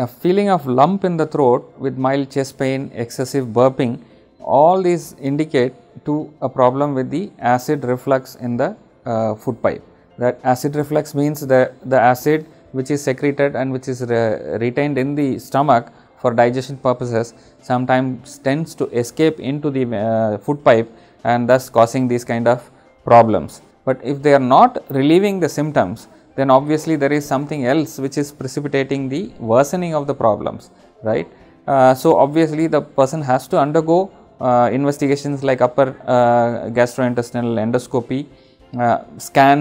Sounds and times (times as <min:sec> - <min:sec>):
Music: 0:00.0 - 0:39.6
Speech: 0:00.0 - 0:39.6.